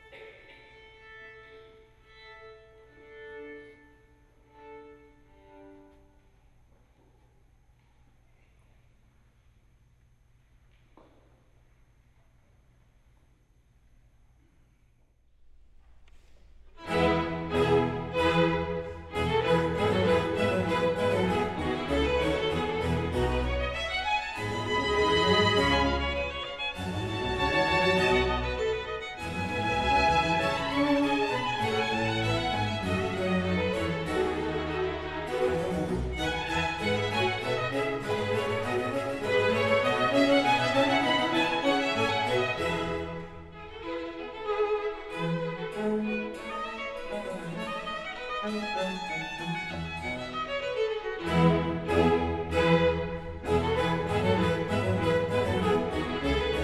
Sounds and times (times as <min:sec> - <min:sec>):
Violin, fiddle: 0:00.0 - 0:06.2, 0:16.8 - 0:56.6.